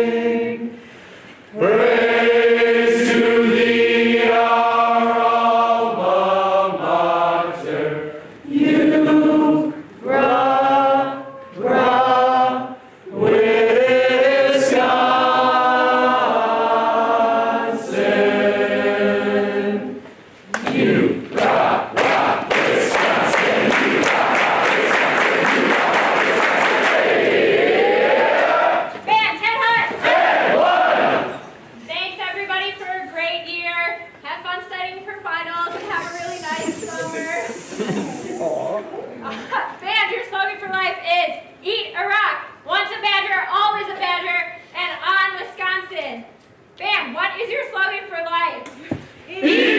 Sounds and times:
Choir: 0:00.0 - 0:00.8, 0:01.5 - 0:20.0, 0:20.6 - 0:28.9, 0:29.9 - 0:31.4, 0:49.4 - 0:49.7.

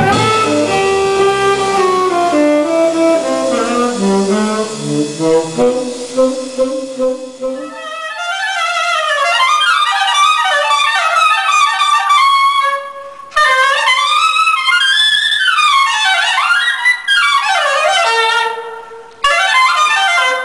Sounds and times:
Saxophone: 0:00.0 - 0:10.1.

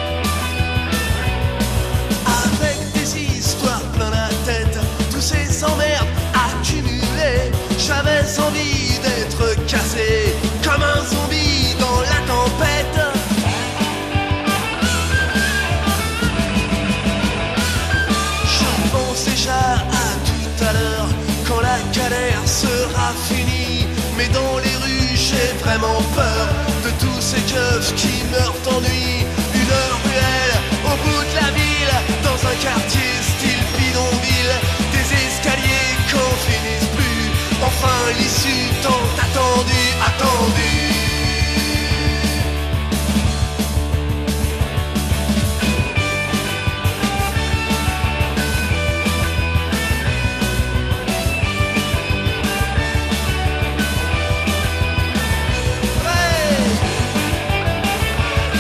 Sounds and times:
Music: 0:00.0 - 0:58.6.

